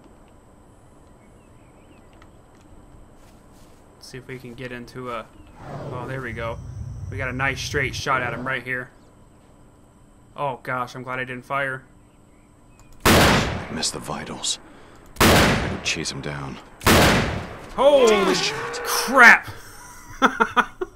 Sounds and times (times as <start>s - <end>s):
Speech: 4.0s - 5.3s, 5.9s - 8.9s, 10.4s - 11.9s, 13.7s - 14.6s, 15.7s - 16.6s, 17.8s - 19.5s
Gunshot, gunfire: 13.1s - 13.7s, 15.2s - 15.9s, 16.8s - 17.5s.